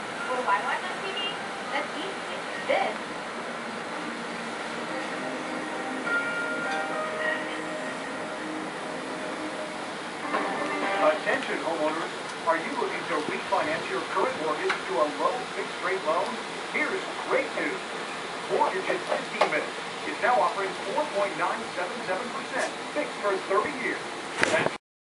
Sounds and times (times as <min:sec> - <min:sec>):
Speech: 0:00.3 - 0:03.0, 0:11.0 - 0:17.8, 0:18.5 - 0:24.8.